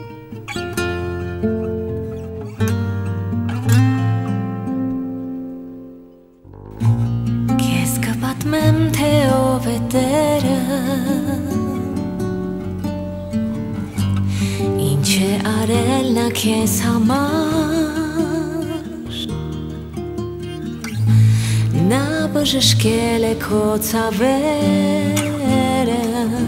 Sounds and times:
Music: 0.0s - 26.4s.

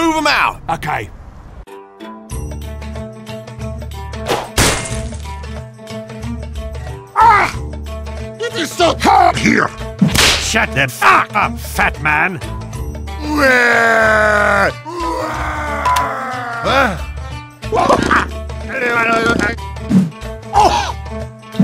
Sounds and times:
Speech: 0.0s - 1.1s, 8.4s - 9.8s, 18.7s - 19.6s
Music: 1.7s - 21.6s.

